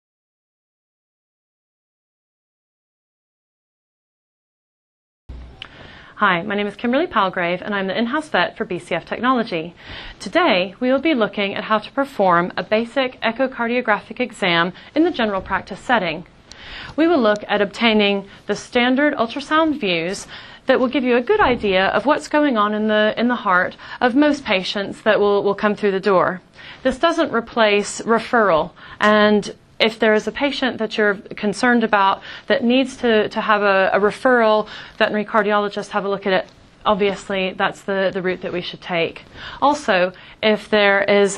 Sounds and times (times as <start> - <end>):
Speech: 6.2 - 16.3, 17.0 - 41.3.